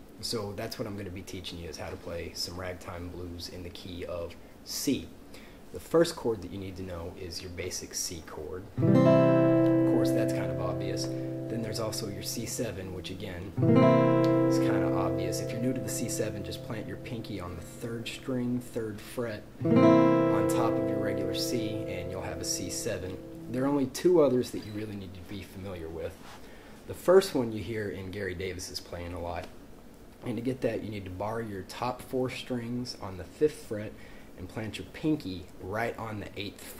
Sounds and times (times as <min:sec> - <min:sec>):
Speech: 0:00.2 - 0:08.7, 0:09.8 - 0:13.6, 0:14.5 - 0:19.6, 0:20.3 - 0:26.2, 0:26.9 - 0:29.6, 0:30.2 - 0:36.7
Acoustic guitar: 0:08.8 - 0:12.7, 0:13.6 - 0:23.9.